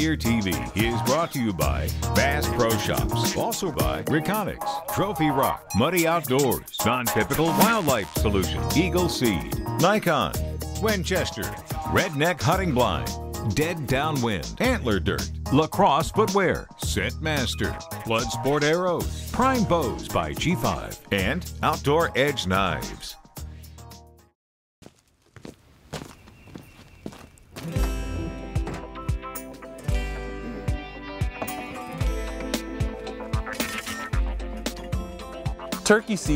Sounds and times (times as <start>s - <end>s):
Speech: 0.0s - 23.2s, 35.8s - 36.3s
Music: 0.0s - 24.4s, 27.6s - 36.3s.